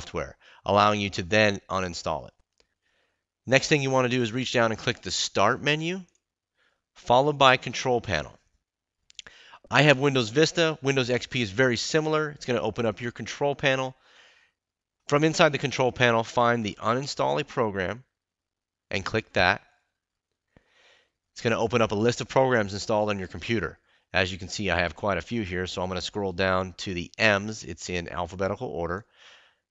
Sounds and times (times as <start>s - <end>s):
Speech: 0.0s - 2.4s, 3.5s - 6.2s, 7.0s - 8.4s, 9.6s - 14.0s, 15.1s - 18.1s, 18.9s - 19.7s, 21.4s - 29.1s.